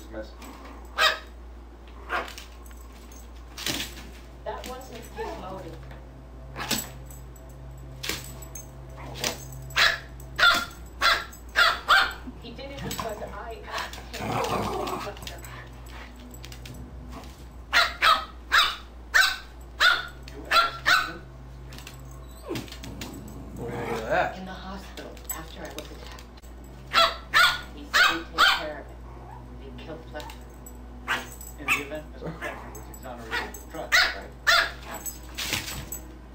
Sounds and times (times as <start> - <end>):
Speech: 4.5 - 5.9, 12.4 - 15.7, 23.7 - 26.3, 31.6 - 34.3.